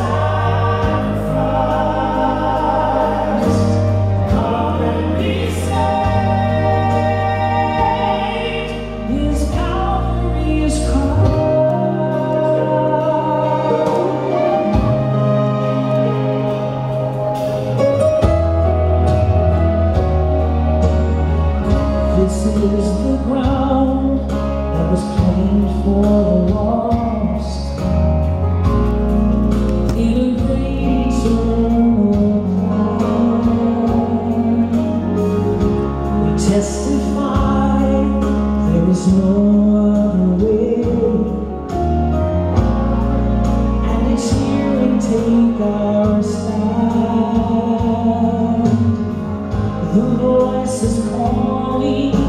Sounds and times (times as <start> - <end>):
Singing: 0.0 - 14.9, 29.9 - 35.6
Music: 0.0 - 52.2.